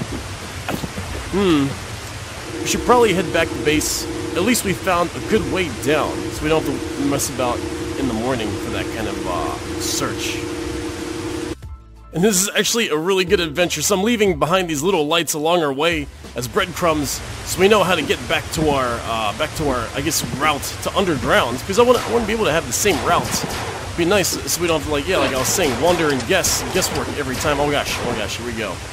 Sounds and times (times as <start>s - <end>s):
White noise: 0.0s - 11.6s, 16.6s - 28.9s.